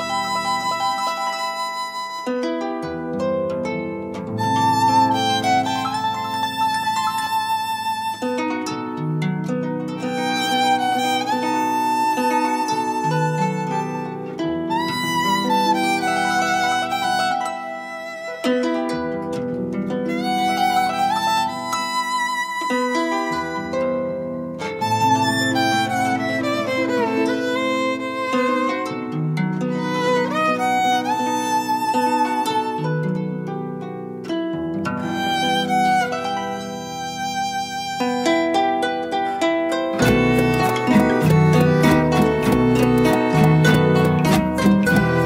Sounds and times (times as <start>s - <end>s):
Violin, fiddle: 0.0s - 2.5s, 4.3s - 9.2s, 10.0s - 18.8s, 20.0s - 33.2s, 35.0s - 45.2s.